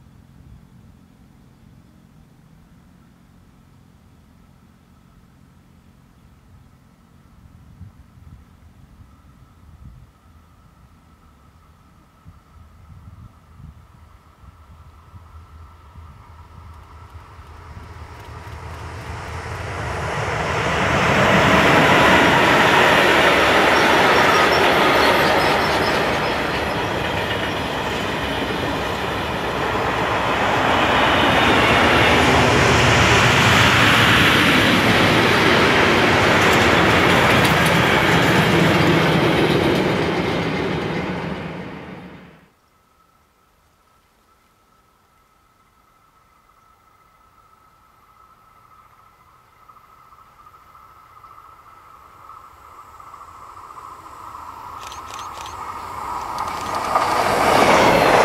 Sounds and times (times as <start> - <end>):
Railroad car, train wagon: 0.0 - 58.2
Train: 0.0 - 58.2.